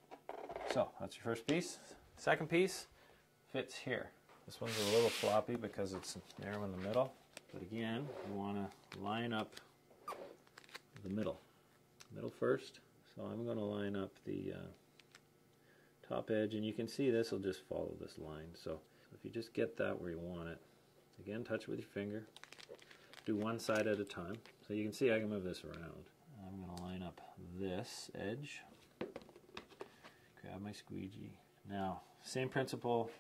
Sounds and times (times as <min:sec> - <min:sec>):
Speech: 0:00.7 - 0:02.9, 0:03.5 - 0:09.7, 0:11.0 - 0:11.4, 0:12.1 - 0:14.8, 0:16.0 - 0:20.6, 0:21.2 - 0:22.3, 0:23.3 - 0:28.8, 0:30.4 - 0:33.2.